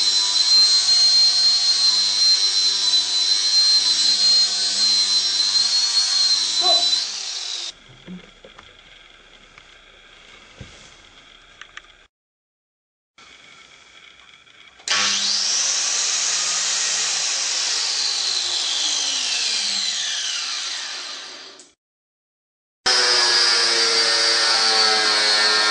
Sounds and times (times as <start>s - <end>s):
Power tool: 0.0s - 12.1s, 13.2s - 21.8s, 22.9s - 25.7s.